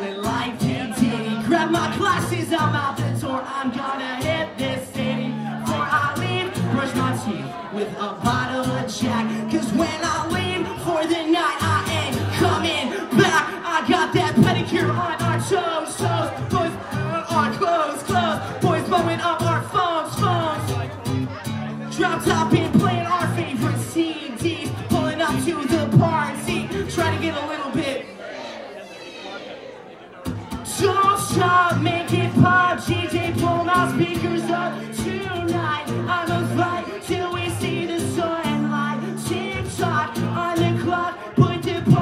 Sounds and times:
Speech: 0:00.0 - 0:42.0
Music: 0:00.1 - 0:07.4, 0:08.2 - 0:27.3, 0:30.3 - 0:42.0.

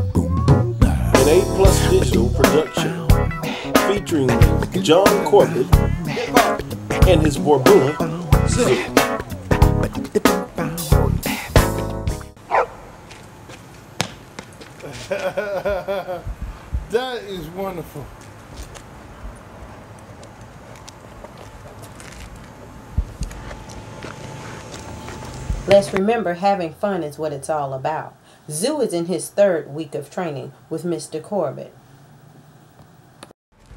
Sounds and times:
Music: 0:00.0 - 0:12.4
Speech: 0:07.0 - 0:08.8, 0:16.9 - 0:18.1, 0:25.7 - 0:31.8
Bow-wow: 0:12.5 - 0:12.8.

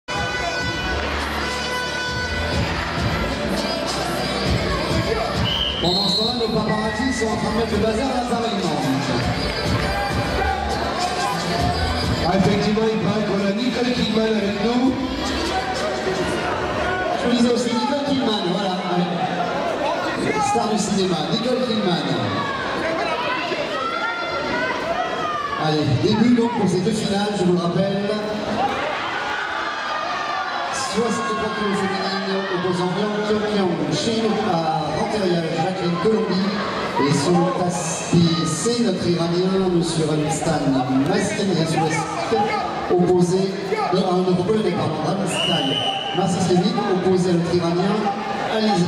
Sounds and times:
Wind instrument, woodwind instrument: 0:01.7 - 0:07.2.

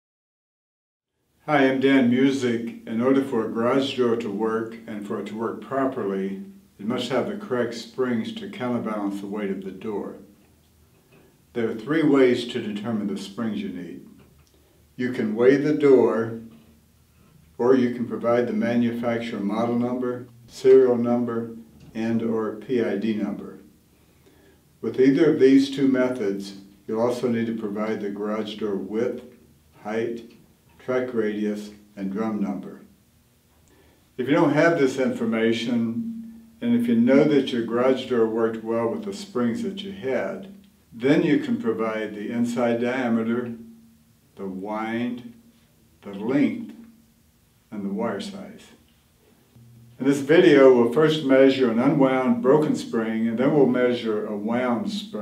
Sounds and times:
Speech: 0:01.4 - 0:10.3, 0:11.5 - 0:14.1, 0:15.0 - 0:16.5, 0:17.6 - 0:23.7, 0:24.8 - 0:32.9, 0:34.2 - 0:43.6, 0:44.4 - 0:45.3, 0:46.0 - 0:46.8, 0:47.7 - 0:48.8, 0:49.6 - 0:55.2.

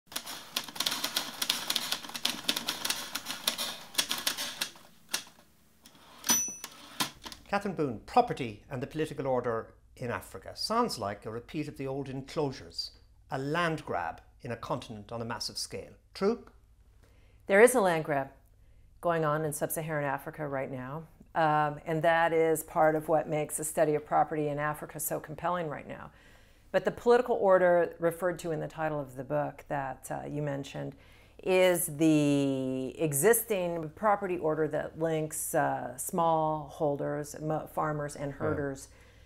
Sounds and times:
Inside, small room: 0:00.0 - 0:39.2
Typewriter: 0:00.1 - 0:07.4.

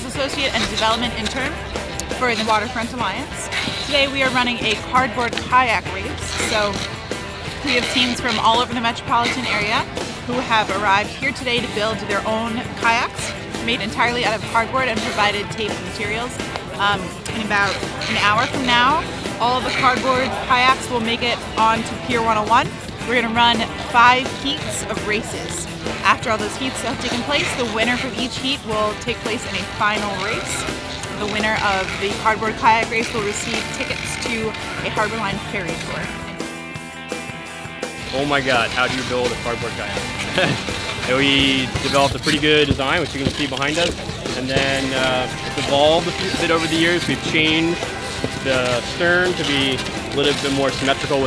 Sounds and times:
Speech: 0:00.0 - 0:01.5, 0:02.1 - 0:06.8, 0:07.6 - 0:30.6, 0:31.2 - 0:36.1, 0:38.2 - 0:47.8, 0:48.4 - 0:51.2
Music: 0:00.0 - 0:51.2.

